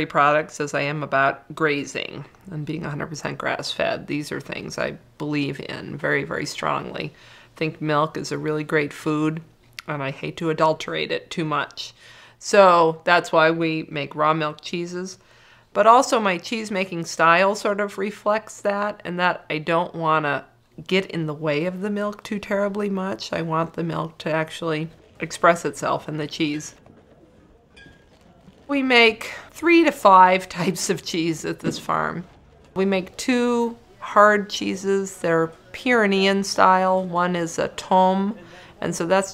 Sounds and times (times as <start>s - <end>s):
Speech: 0.0s - 15.2s, 15.8s - 26.8s, 28.7s - 39.3s.